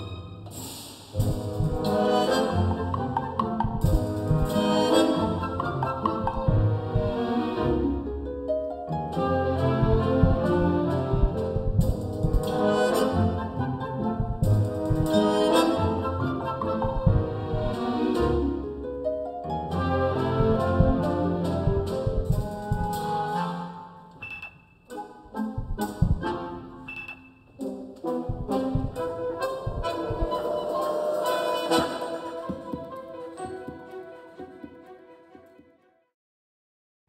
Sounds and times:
Orchestra: 0.0 - 35.8
Classical music: 0.0 - 36.0.

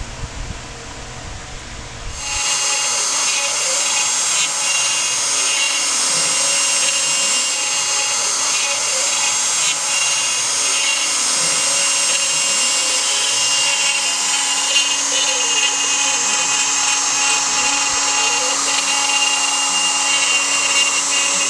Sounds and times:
Tools: 2.2 - 21.5.

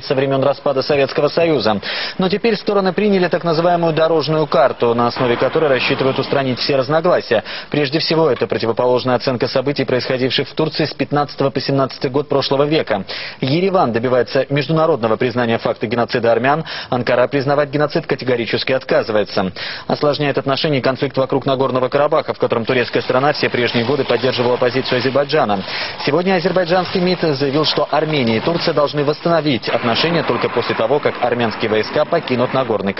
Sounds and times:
Speech: 0.0 - 32.9.

